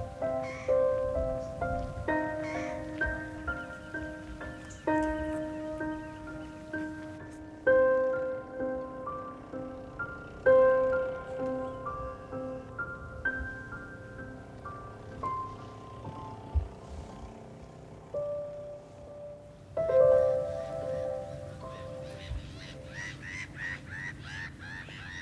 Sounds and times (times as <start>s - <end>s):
Music: 0.0s - 17.3s, 18.2s - 23.1s
Outside, rural or natural: 0.0s - 25.2s.